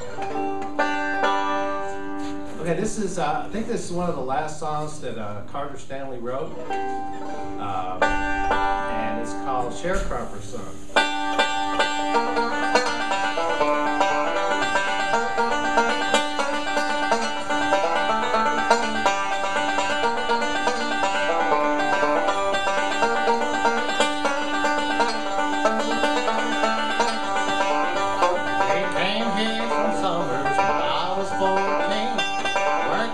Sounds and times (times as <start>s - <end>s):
Banjo: 0.0s - 33.1s
Speech: 2.6s - 6.6s, 7.6s - 8.1s, 8.9s - 10.8s, 28.7s - 32.2s, 32.8s - 33.1s.